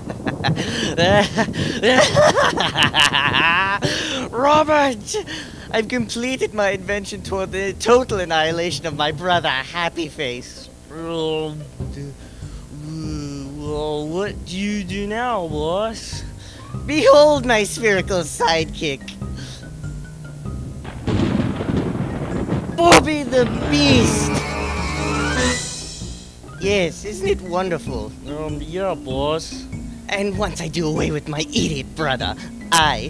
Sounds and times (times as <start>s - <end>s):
Speech: 4.3s - 12.2s, 12.8s - 19.2s, 22.8s - 24.3s, 26.6s - 33.0s
Music: 10.9s - 21.2s, 22.8s - 33.0s.